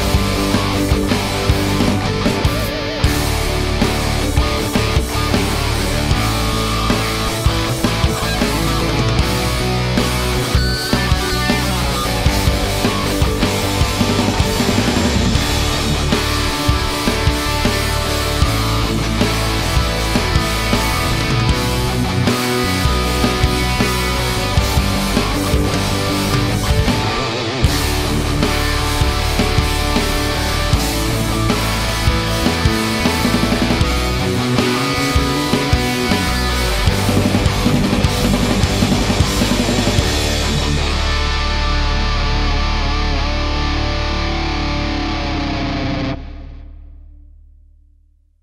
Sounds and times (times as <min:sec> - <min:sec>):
Electric guitar: 0:00.0 - 0:47.5.